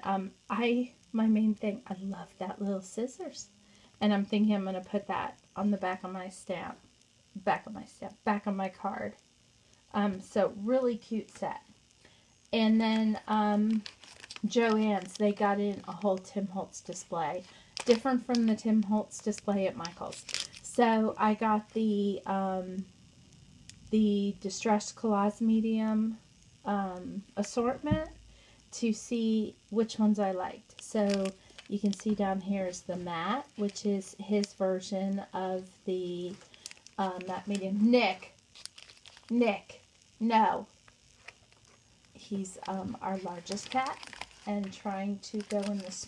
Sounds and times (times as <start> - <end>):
Speech: 0.0 - 6.8, 7.4 - 9.2, 9.9 - 11.7, 12.6 - 13.8, 14.4 - 22.9, 23.9 - 36.4, 37.0 - 38.3, 39.3 - 40.7, 42.2 - 46.0
Inside, small room: 0.0 - 46.0.